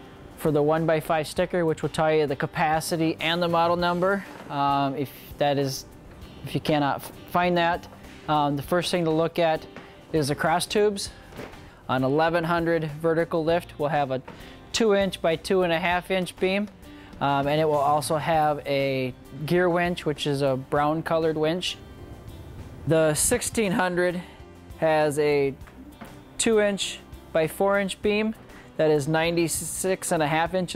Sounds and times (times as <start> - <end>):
Music: 0.0 - 30.7
Speech: 0.4 - 5.8, 6.5 - 11.1, 11.9 - 21.8, 22.9 - 25.6, 26.4 - 30.7.